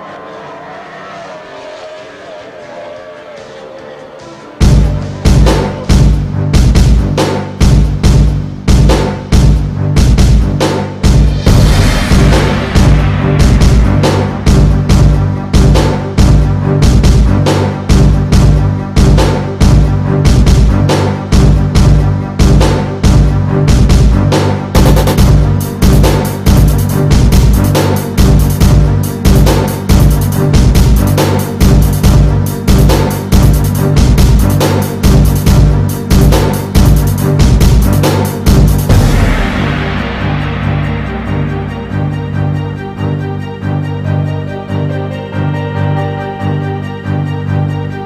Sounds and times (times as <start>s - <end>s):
Theme music: 0.0s - 48.0s.